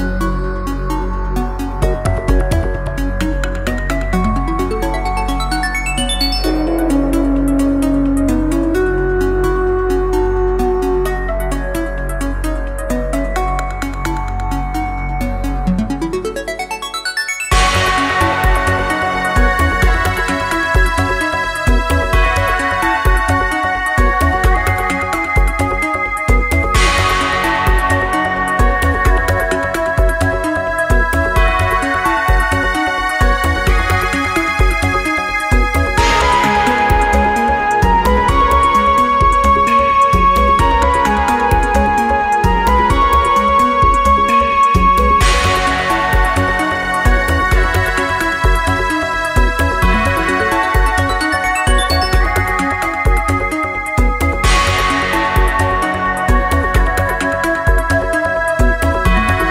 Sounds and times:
Electronic music: 0:00.0 - 0:59.5.

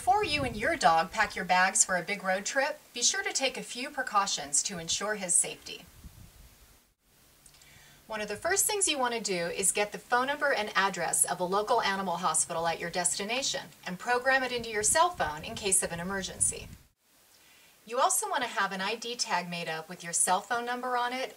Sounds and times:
Speech: 0:00.0 - 0:05.8, 0:08.1 - 0:16.8, 0:17.9 - 0:21.3.

